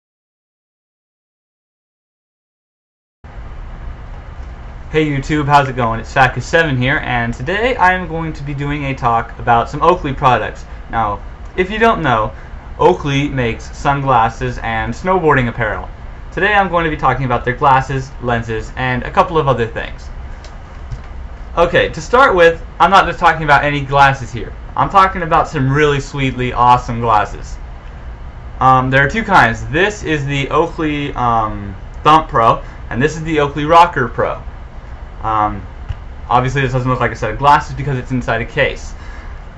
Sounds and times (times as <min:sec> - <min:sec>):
Speech: 0:04.9 - 0:20.2, 0:21.6 - 0:27.6, 0:28.6 - 0:34.5, 0:35.2 - 0:35.7, 0:36.3 - 0:39.0.